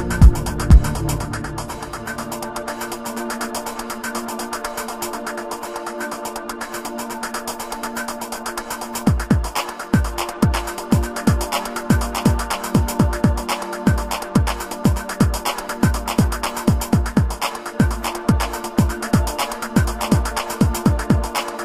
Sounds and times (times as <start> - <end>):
Drum machine: 0.0 - 4.8, 7.4 - 21.6
Synthesizer: 0.0 - 21.6.